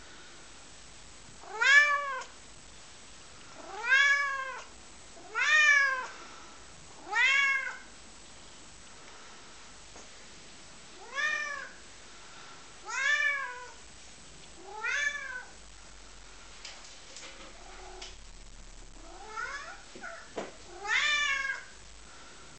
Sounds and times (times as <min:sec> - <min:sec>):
Meow: 0:01.4 - 0:02.3, 0:03.6 - 0:06.1, 0:07.0 - 0:07.9, 0:11.0 - 0:11.8, 0:12.9 - 0:13.8, 0:14.6 - 0:15.6, 0:19.1 - 0:21.7.